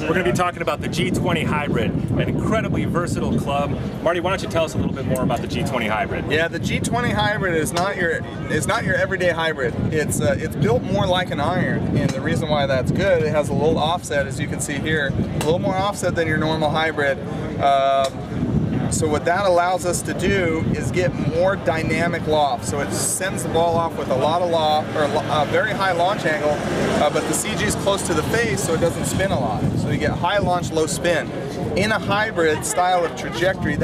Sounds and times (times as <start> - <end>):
Speech: 0.0 - 18.2, 18.9 - 33.8.